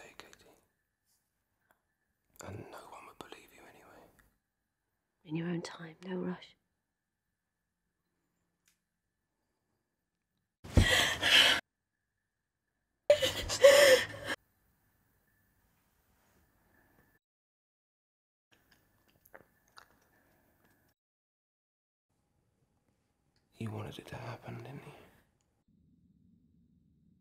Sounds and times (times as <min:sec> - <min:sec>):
Whispering: 0:00.0 - 0:00.7, 0:02.4 - 0:04.2, 0:05.3 - 0:06.6, 0:23.6 - 0:25.1.